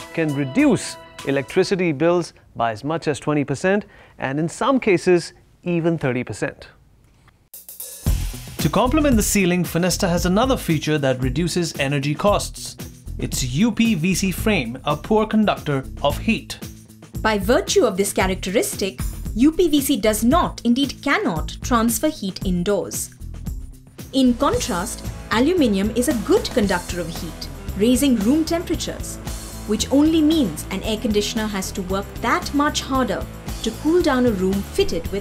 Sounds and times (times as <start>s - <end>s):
Music: 0.0s - 2.0s, 7.5s - 35.2s
Speech: 0.2s - 6.8s, 8.6s - 16.6s, 17.3s - 23.2s, 24.2s - 29.0s, 29.7s - 35.2s.